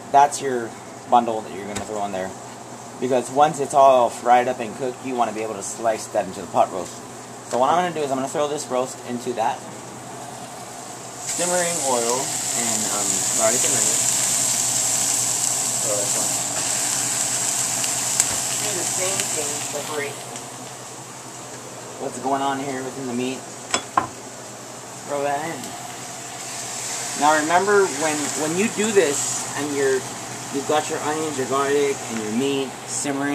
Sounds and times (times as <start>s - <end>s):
Speech: 0.1s - 2.4s, 3.0s - 9.6s, 11.3s - 14.0s, 15.8s - 16.3s, 22.0s - 23.4s, 27.2s - 33.3s.